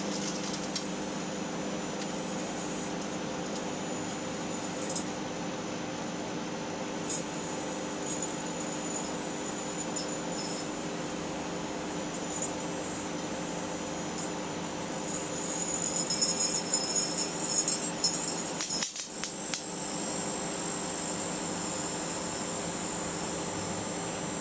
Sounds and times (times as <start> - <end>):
Inside, small room: 0.0 - 24.4
Microwave oven: 0.0 - 24.4.